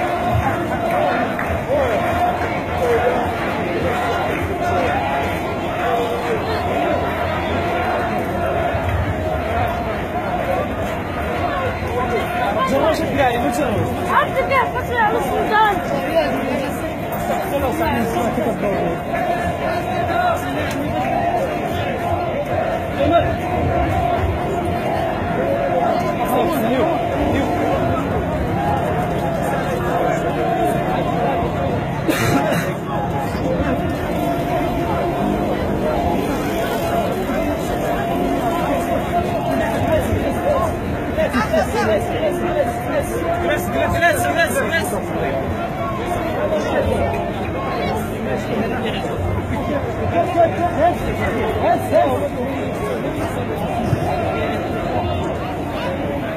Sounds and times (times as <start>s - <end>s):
Speech: 0.0s - 56.3s.